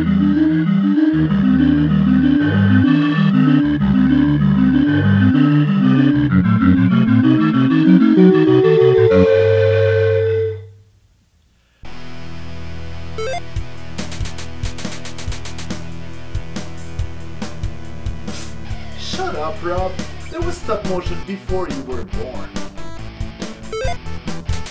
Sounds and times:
Music: 0:00.0 - 0:10.7, 0:11.8 - 0:24.7.

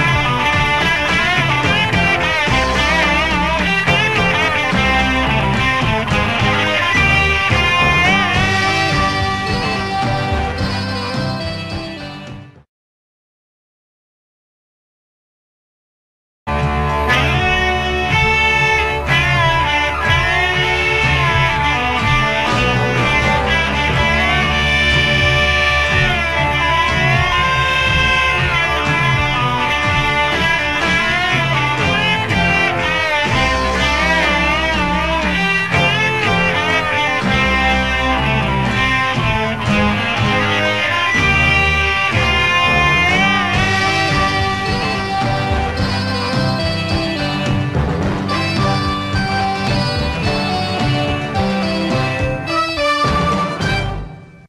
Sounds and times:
Electric guitar: 0:00.0 - 0:12.6, 0:16.5 - 0:54.4
Strum: 0:00.0 - 0:12.6, 0:16.5 - 0:54.4.

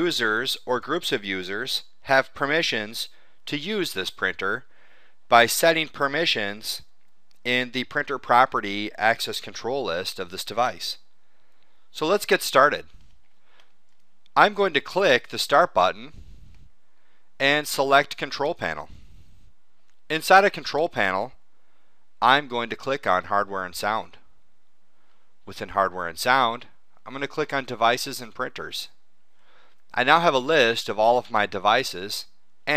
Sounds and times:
Speech: 0:00.0 - 0:04.7, 0:05.3 - 0:06.9, 0:07.5 - 0:11.0, 0:12.0 - 0:12.9, 0:14.4 - 0:16.2, 0:17.4 - 0:19.0, 0:20.1 - 0:21.4, 0:22.2 - 0:24.2, 0:25.5 - 0:29.0, 0:29.9 - 0:32.7.

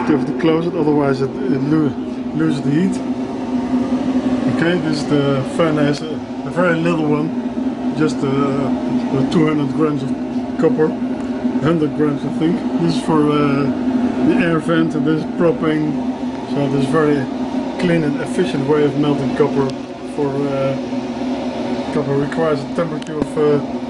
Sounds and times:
Speech: 0:00.0 - 0:03.1, 0:04.5 - 0:11.0, 0:11.6 - 0:20.8, 0:21.9 - 0:23.7.

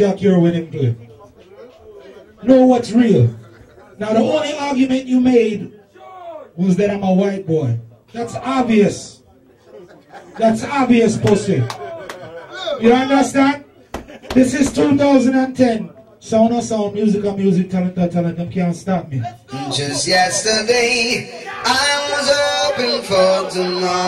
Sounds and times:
Speech: 0:14.4 - 0:22.0.

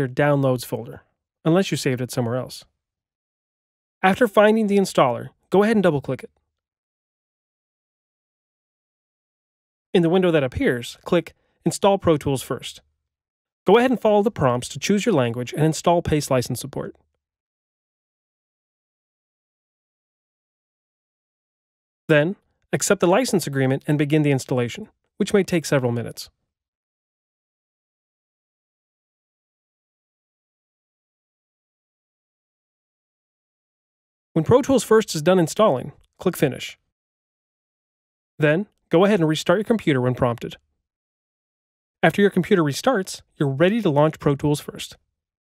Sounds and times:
Speech: 0:00.0 - 0:02.7, 0:04.0 - 0:06.3, 0:10.0 - 0:12.8, 0:13.7 - 0:17.0, 0:22.1 - 0:26.3, 0:34.4 - 0:36.8, 0:38.4 - 0:40.6, 0:42.0 - 0:45.0.

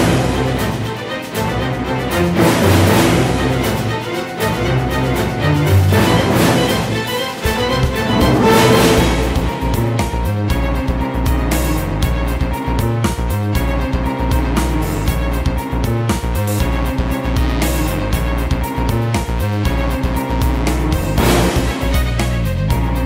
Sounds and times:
Music: 0:00.0 - 0:23.0.

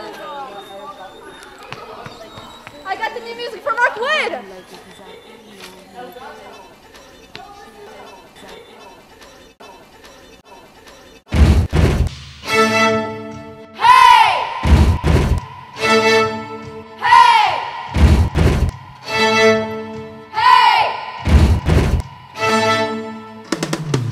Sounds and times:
Music: 0:11.9 - 0:24.1.

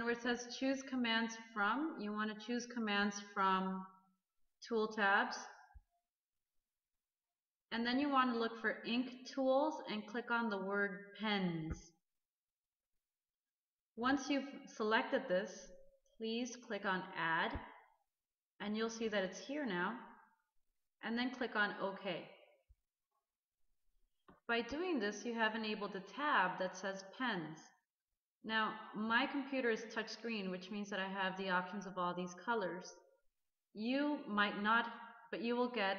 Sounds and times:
Speech: 0:00.0 - 0:03.9, 0:04.6 - 0:05.6, 0:07.7 - 0:11.9, 0:14.0 - 0:17.7, 0:18.6 - 0:20.1, 0:21.0 - 0:22.4, 0:24.5 - 0:27.8, 0:28.5 - 0:33.0, 0:33.8 - 0:35.9.

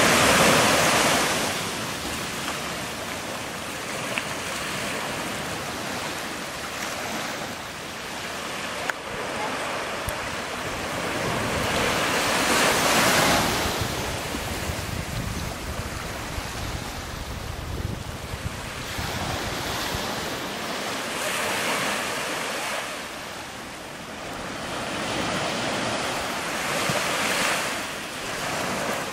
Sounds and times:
Ocean: 0:00.0 - 0:29.1
Outside, rural or natural: 0:00.0 - 0:29.1.

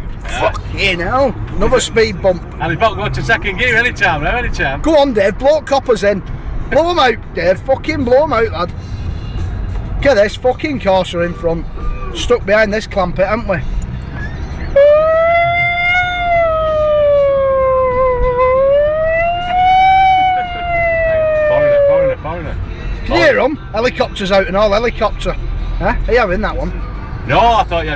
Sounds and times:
Car: 0:00.0 - 0:27.9
Outside, urban or manmade: 0:00.0 - 0:27.9.

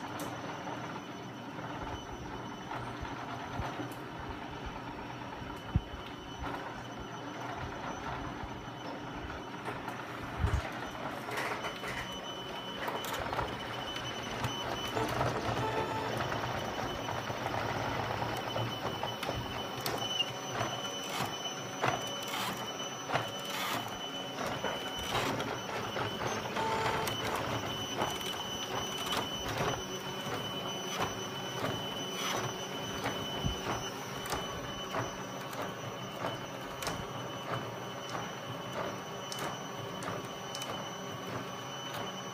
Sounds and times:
Printer: 0:00.0 - 0:42.3.

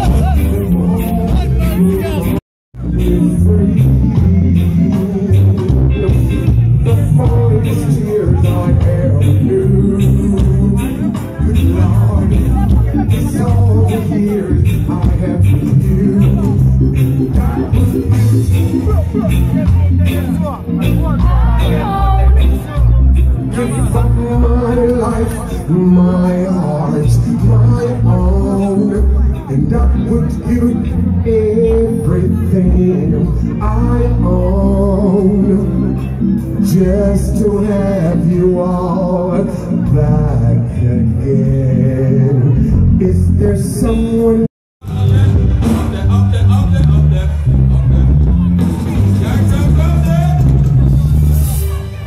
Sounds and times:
Music: 0:00.0 - 0:52.0
Speech: 0:10.7 - 0:17.9, 0:18.6 - 0:24.2.

